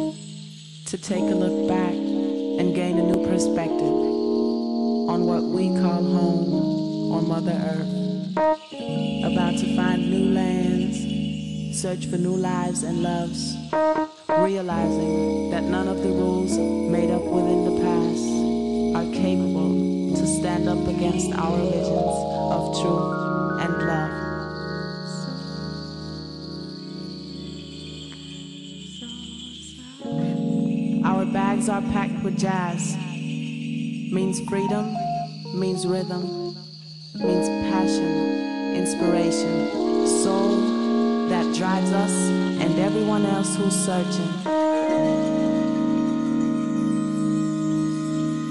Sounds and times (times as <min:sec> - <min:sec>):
Music: 0:00.0 - 0:48.5.